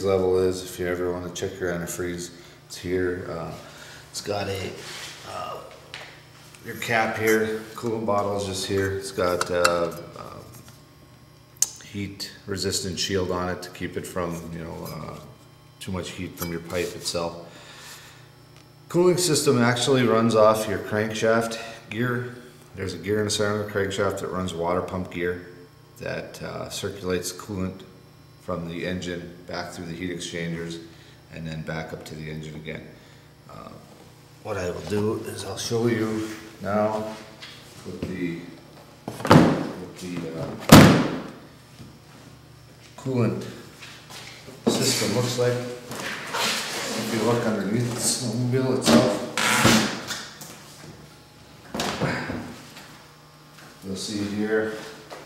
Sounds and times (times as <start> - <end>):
Speech: 0.0 - 5.8, 6.6 - 10.5, 11.8 - 17.4, 18.9 - 38.6, 39.7 - 40.6, 43.0 - 43.6, 44.7 - 45.8, 46.8 - 49.3, 53.8 - 55.0.